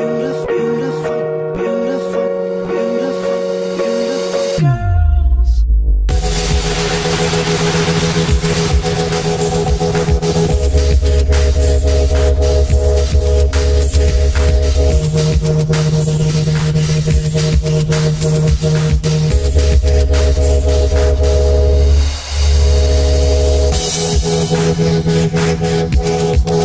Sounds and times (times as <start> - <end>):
Dubstep: 1.7 - 26.6.